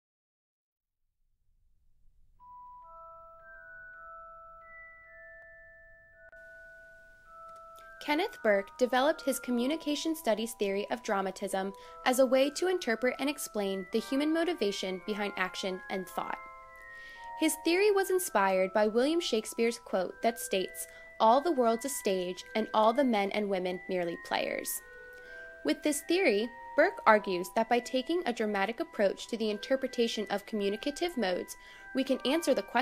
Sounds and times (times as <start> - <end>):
Music: 2.4 - 32.8
Speech: 8.0 - 16.4, 17.4 - 24.8, 25.7 - 32.8.